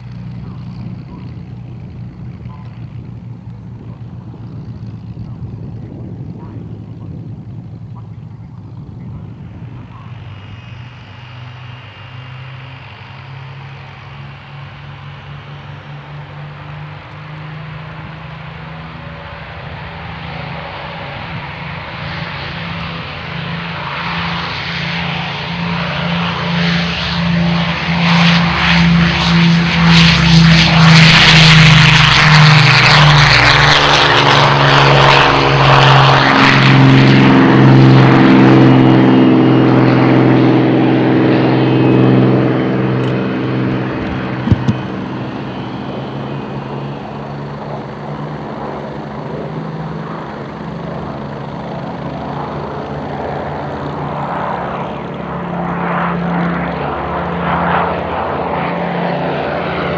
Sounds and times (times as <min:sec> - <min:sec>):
Propeller, airscrew: 0:00.0 - 0:59.9.